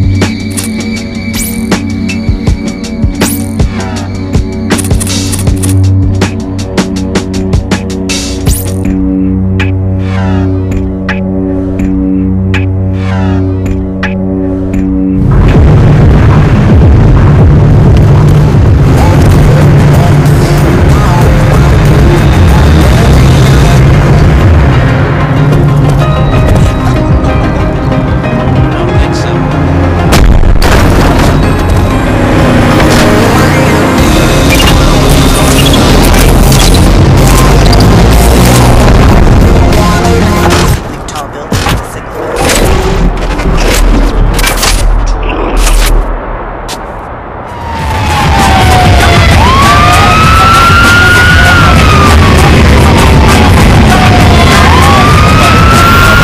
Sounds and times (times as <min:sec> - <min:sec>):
Music: 0:00.0 - 0:46.4, 0:47.6 - 0:56.2.